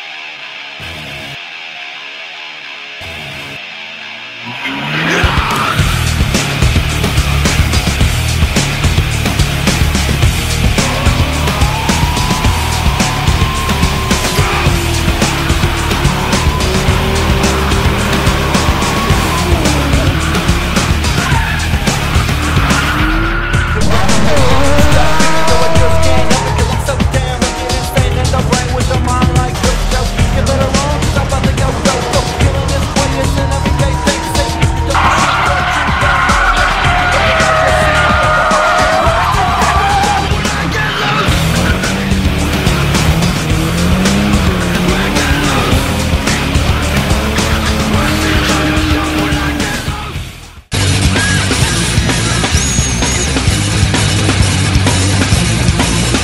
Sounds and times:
Music: 0:00.0 - 0:56.2.

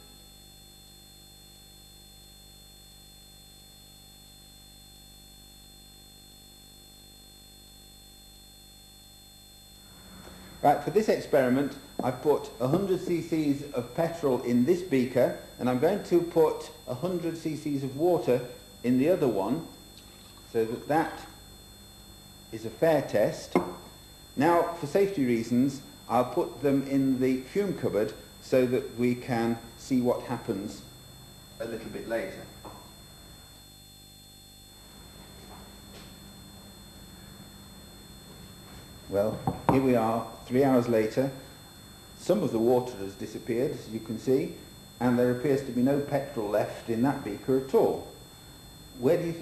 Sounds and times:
Speech: 0:10.6 - 0:19.8, 0:20.5 - 0:21.4, 0:22.6 - 0:23.6, 0:24.4 - 0:30.9, 0:31.6 - 0:32.6, 0:39.1 - 0:41.4, 0:42.2 - 0:48.2, 0:49.0 - 0:49.4.

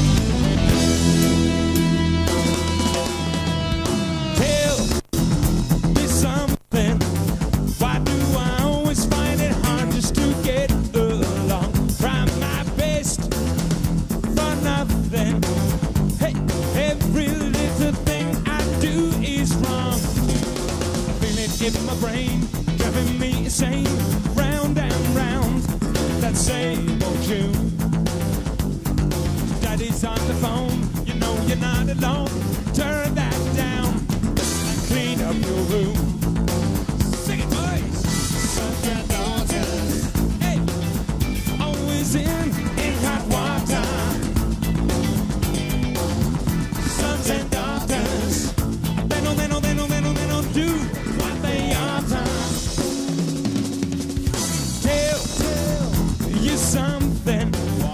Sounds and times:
Music: 0:00.0 - 0:57.9.

